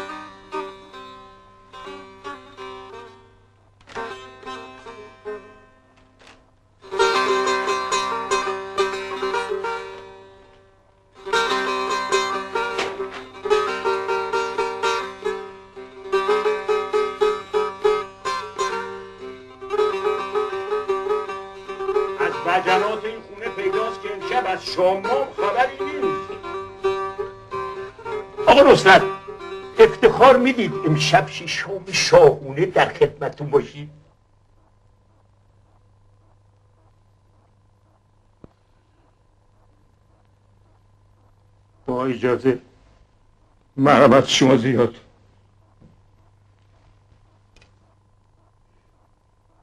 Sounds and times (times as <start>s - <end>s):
Mandolin: 0.0s - 6.0s, 6.8s - 10.6s, 11.2s - 33.7s
Banjo: 6.9s - 10.2s, 11.2s - 33.8s.